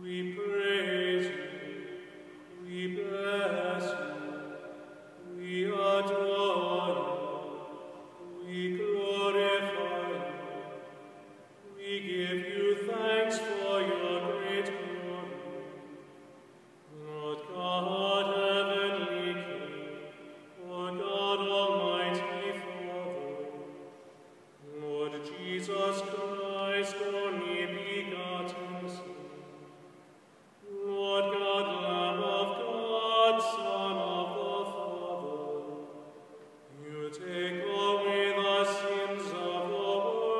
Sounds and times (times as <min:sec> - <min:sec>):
Mantra: 0:00.0 - 0:16.2, 0:16.9 - 0:23.9, 0:24.6 - 0:29.8, 0:30.6 - 0:40.3.